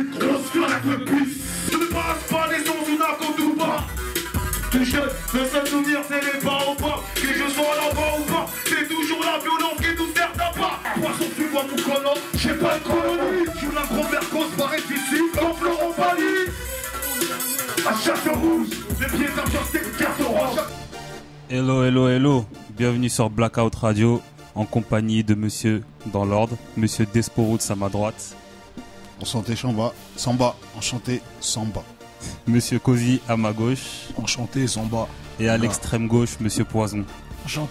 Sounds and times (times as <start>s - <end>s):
Music: 0.0s - 37.7s
Speech: 17.8s - 20.7s, 21.5s - 28.4s, 29.2s - 37.7s.